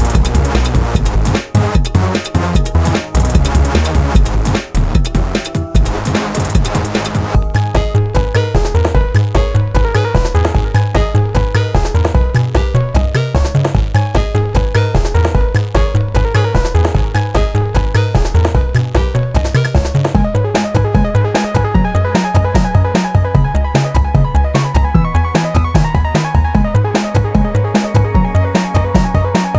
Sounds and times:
Music: 0:00.0 - 0:29.5.

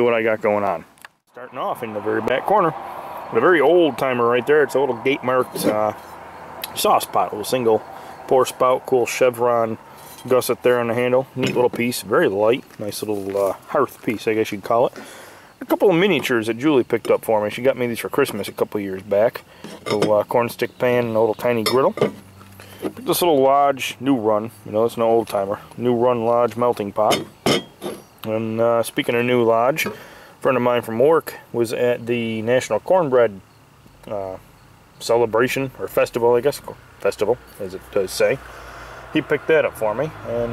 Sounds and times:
Speech: 0:00.0 - 0:06.0, 0:06.6 - 0:15.0, 0:15.6 - 0:22.0, 0:23.0 - 0:27.3, 0:28.2 - 0:33.4, 0:34.0 - 0:34.4, 0:35.0 - 0:38.4, 0:39.2 - 0:40.5
Outside, rural or natural: 0:00.0 - 0:40.5.

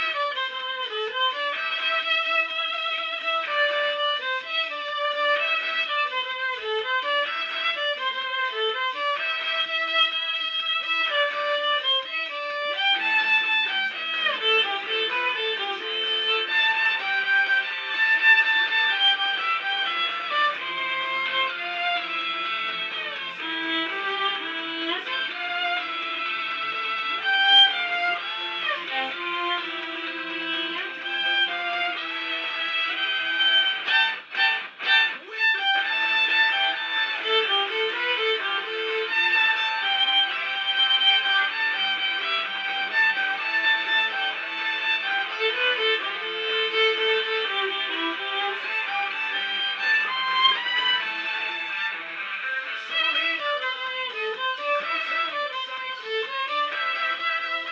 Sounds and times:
Violin, fiddle: 0:00.0 - 0:57.7.

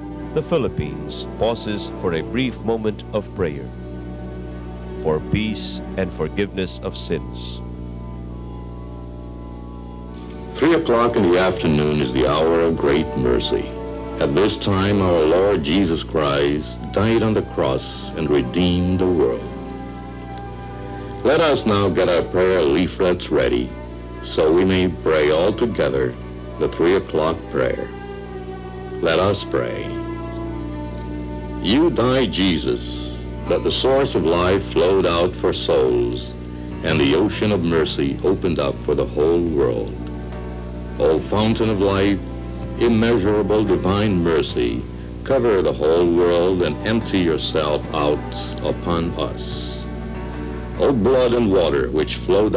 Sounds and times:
Music: 0:00.0 - 0:52.5
Speech: 0:00.4 - 0:03.7, 0:05.0 - 0:07.6, 0:10.6 - 0:19.5, 0:21.2 - 0:27.9, 0:29.0 - 0:30.0, 0:31.6 - 0:40.0, 0:41.0 - 0:42.2, 0:42.8 - 0:49.9, 0:50.8 - 0:52.5.

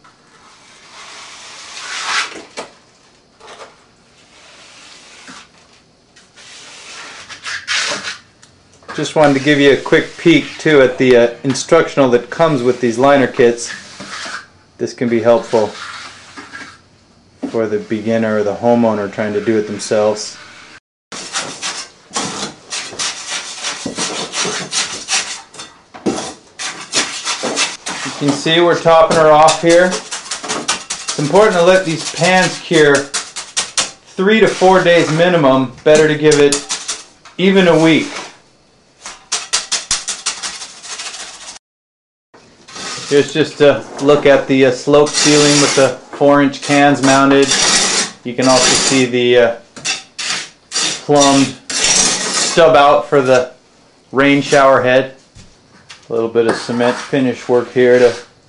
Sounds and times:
Inside, small room: 0:00.0 - 0:41.6, 0:42.4 - 0:58.4
Speech: 0:08.9 - 0:13.8, 0:14.8 - 0:15.8, 0:17.4 - 0:20.4, 0:28.1 - 0:30.0, 0:31.2 - 0:33.1, 0:34.2 - 0:36.6, 0:37.4 - 0:38.2, 0:43.1 - 0:47.6, 0:48.2 - 0:49.6, 0:51.1 - 0:51.6, 0:52.5 - 0:55.2, 0:56.1 - 0:58.3.

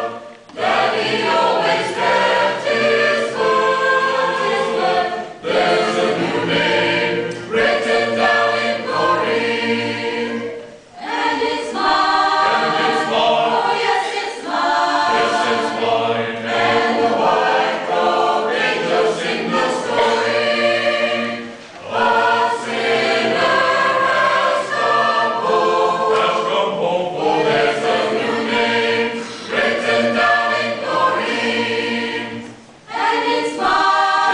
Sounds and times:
Choir: 0:00.0 - 0:34.3
Gospel music: 0:00.0 - 0:34.3.

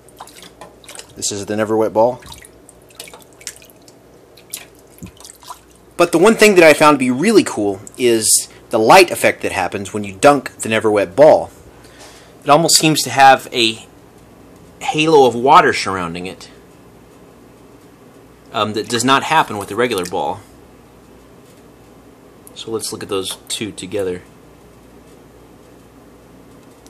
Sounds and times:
Speech: 0:01.2 - 0:02.2, 0:06.0 - 0:11.6, 0:12.4 - 0:13.9, 0:14.8 - 0:16.6, 0:18.5 - 0:20.5, 0:22.6 - 0:24.3.

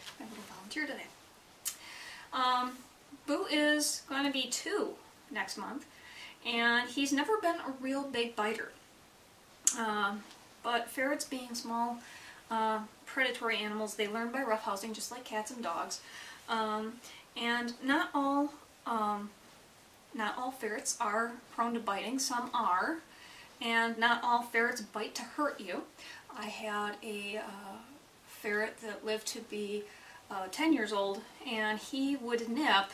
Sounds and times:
Speech: 0:00.0 - 0:01.2, 0:02.4 - 0:08.8, 0:09.7 - 0:19.4, 0:20.2 - 0:32.9.

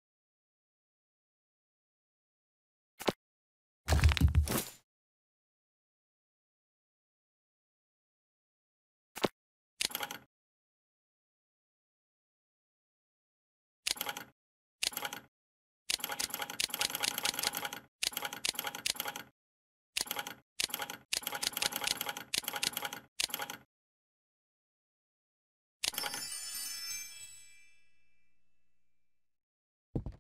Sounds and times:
Music: 0:25.9 - 0:29.0.

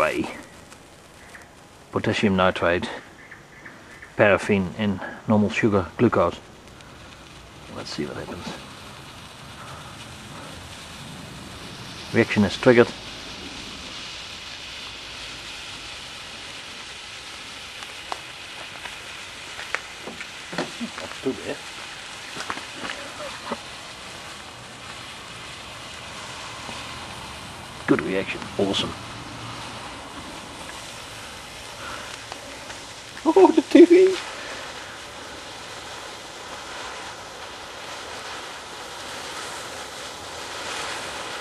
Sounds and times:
Speech: 0:00.0 - 0:00.4, 0:02.0 - 0:03.0, 0:04.2 - 0:06.4, 0:07.7 - 0:08.6, 0:12.1 - 0:13.0, 0:20.8 - 0:21.6, 0:27.9 - 0:29.0, 0:33.2 - 0:34.2.

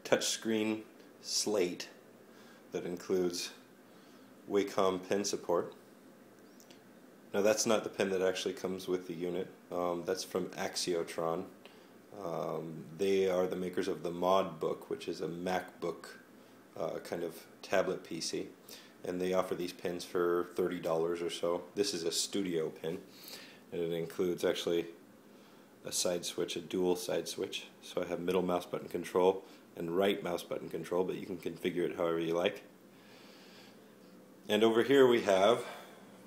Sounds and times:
Speech: 0:00.0 - 0:02.0, 0:02.7 - 0:03.6, 0:04.5 - 0:05.8, 0:07.3 - 0:11.6, 0:12.2 - 0:23.1, 0:23.7 - 0:25.0, 0:25.8 - 0:32.7, 0:34.5 - 0:35.9.

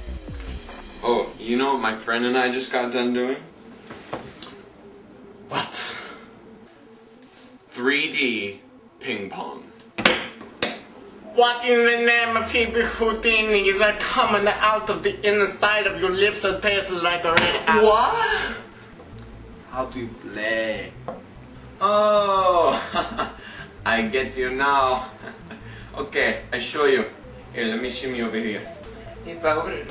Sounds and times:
Music: 0:00.0 - 0:07.0, 0:12.2 - 0:29.9
Speech: 0:11.3 - 0:18.5.

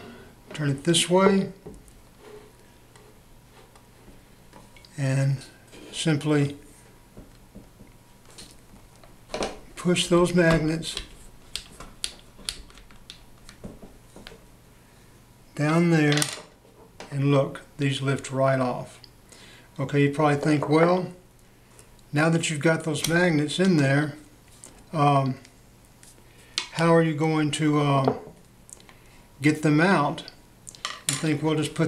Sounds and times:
Inside, small room: 0:00.0 - 0:31.8
Speech: 0:00.6 - 0:01.6, 0:05.0 - 0:06.6, 0:09.8 - 0:11.0, 0:15.6 - 0:16.2, 0:17.1 - 0:19.0, 0:19.8 - 0:21.2, 0:22.1 - 0:24.2, 0:24.9 - 0:25.4, 0:26.8 - 0:28.2, 0:29.4 - 0:30.4, 0:31.1 - 0:31.8.

